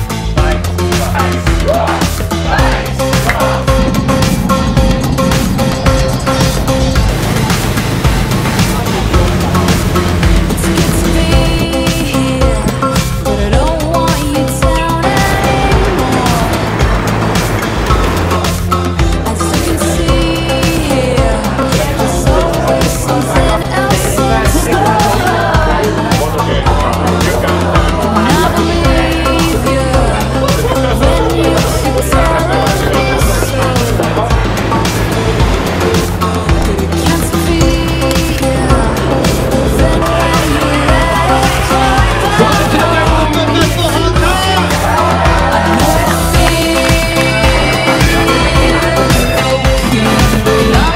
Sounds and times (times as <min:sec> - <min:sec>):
Music: 0:00.0 - 0:50.9.